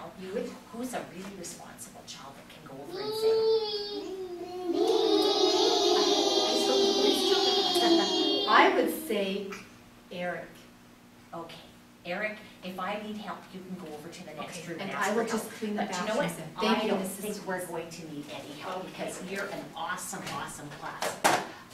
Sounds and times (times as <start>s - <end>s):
Speech: 0.0s - 3.4s, 5.2s - 10.6s, 11.4s - 21.2s.